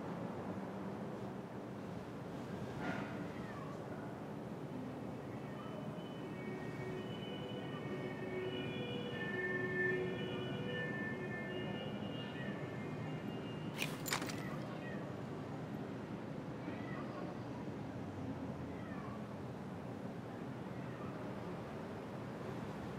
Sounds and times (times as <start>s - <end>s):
Meow: 2.8s - 4.2s, 5.3s - 6.4s, 14.4s - 15.3s, 16.4s - 17.7s, 18.4s - 19.6s, 20.6s - 21.5s.